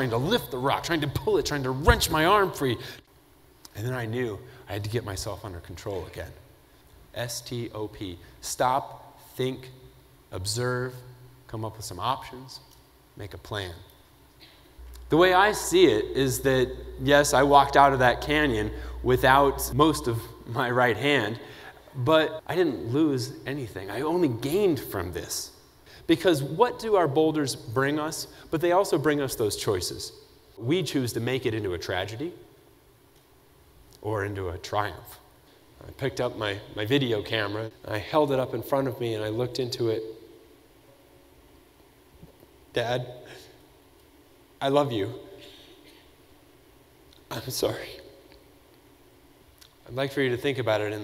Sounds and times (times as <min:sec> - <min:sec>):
Male speech, man speaking: 0:00.0 - 0:02.8, 0:03.7 - 0:06.5, 0:07.1 - 0:13.9, 0:15.1 - 0:21.4, 0:22.0 - 0:25.5, 0:26.1 - 0:32.4, 0:34.0 - 0:40.2, 0:42.7 - 0:43.2, 0:44.6 - 0:45.4, 0:47.3 - 0:48.2, 0:49.8 - 0:51.0
Narration, monologue: 0:00.0 - 0:51.0.